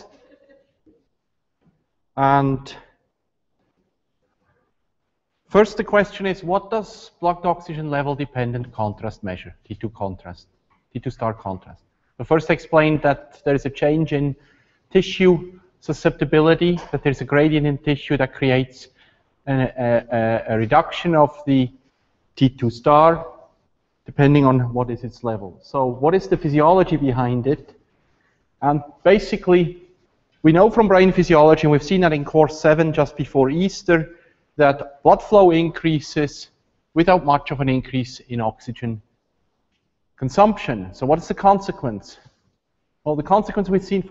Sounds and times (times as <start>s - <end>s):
Speech: 0.0s - 0.6s, 2.2s - 3.0s, 5.5s - 21.8s, 22.4s - 23.4s, 24.0s - 27.8s, 28.6s - 29.8s, 30.4s - 39.1s, 40.2s - 42.3s, 43.1s - 44.1s.